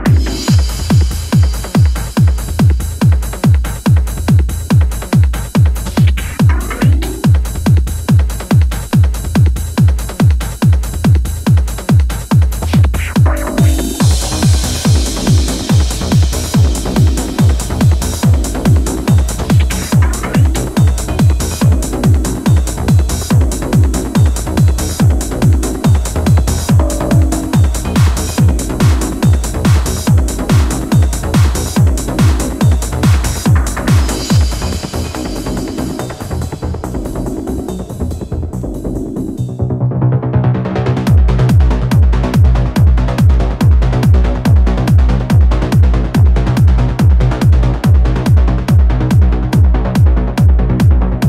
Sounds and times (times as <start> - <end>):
Music: 0.0 - 51.2.